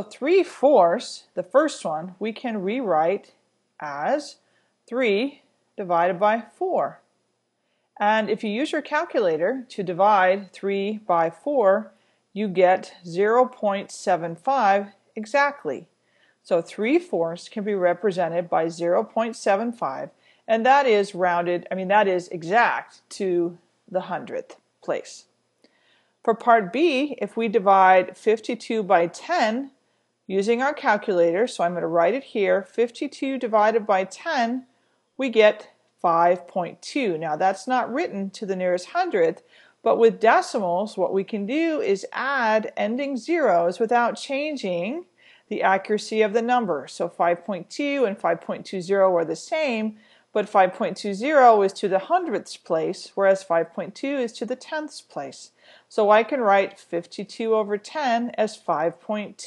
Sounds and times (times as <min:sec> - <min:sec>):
Speech: 0:00.0 - 0:07.0, 0:08.0 - 0:15.9, 0:16.5 - 0:25.3, 0:26.3 - 0:59.4.